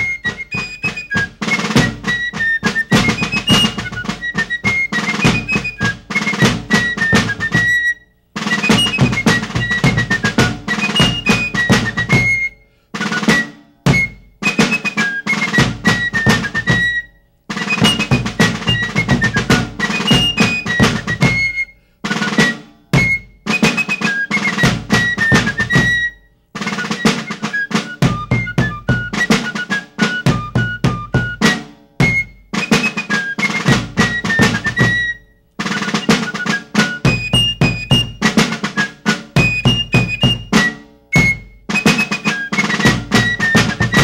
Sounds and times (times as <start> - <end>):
Music: 0.0 - 44.0.